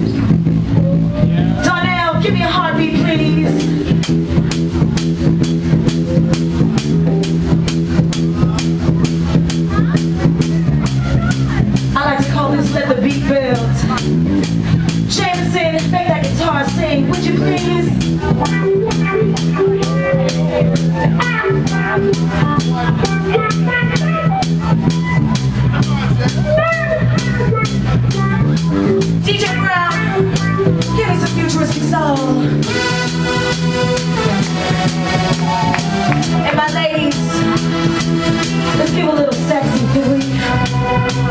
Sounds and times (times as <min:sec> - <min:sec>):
Speech: 0:01.2 - 0:03.8, 0:08.3 - 0:14.2, 0:15.1 - 0:20.5, 0:25.6 - 0:32.6, 0:36.4 - 0:37.4, 0:38.8 - 0:40.4.